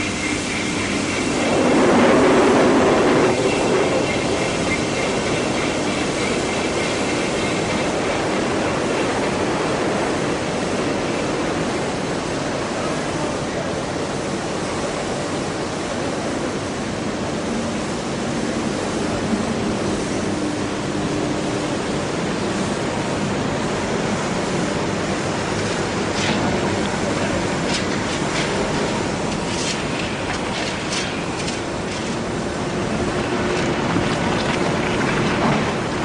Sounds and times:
Pink noise: 0.0 - 36.0.

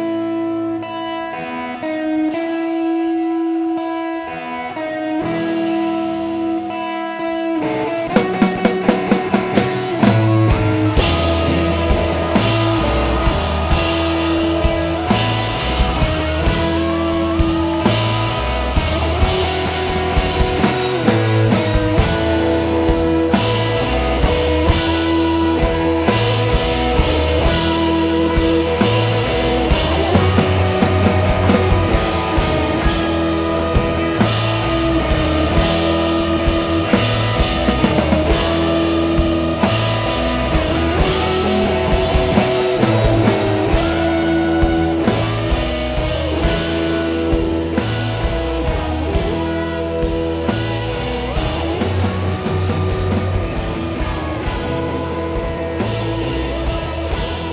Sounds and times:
Drum kit: 0.0 - 57.5
Drum: 5.2 - 57.5.

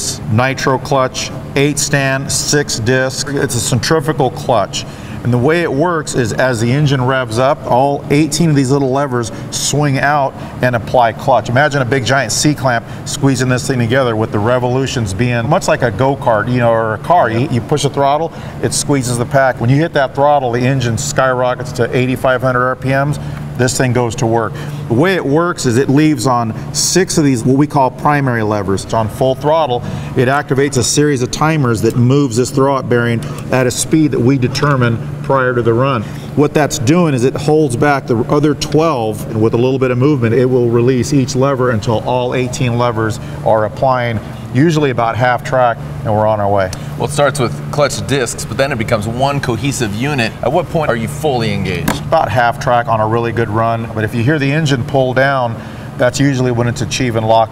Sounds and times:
Speech: 0.0 - 57.5
Vehicle: 0.0 - 57.5.

